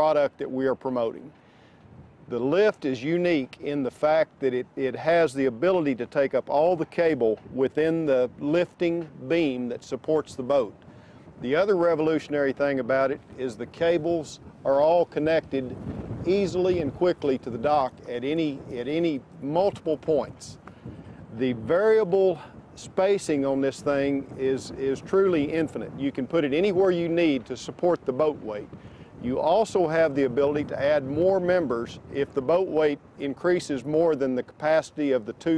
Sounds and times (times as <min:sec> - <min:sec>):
Speech: 0:00.0 - 0:01.3, 0:02.3 - 0:10.7, 0:11.4 - 0:15.7, 0:16.3 - 0:20.6, 0:21.4 - 0:35.5.